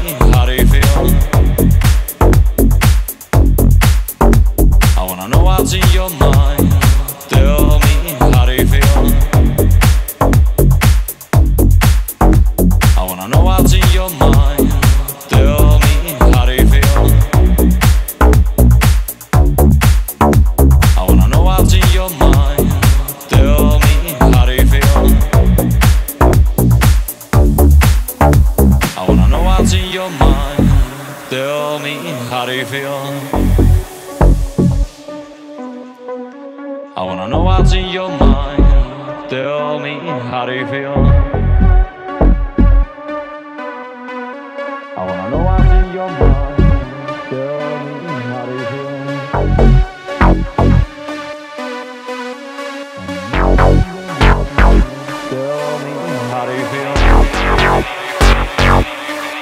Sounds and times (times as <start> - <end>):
Dance music: 0.0 - 59.4
House music: 0.0 - 59.4.